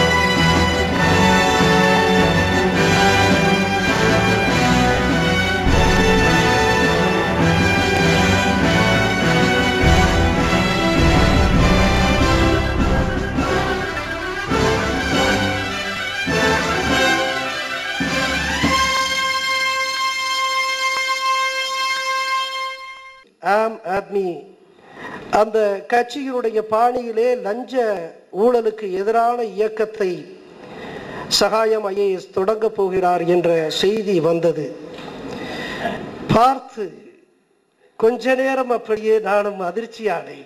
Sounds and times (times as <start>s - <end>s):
Music: 0.0s - 23.3s.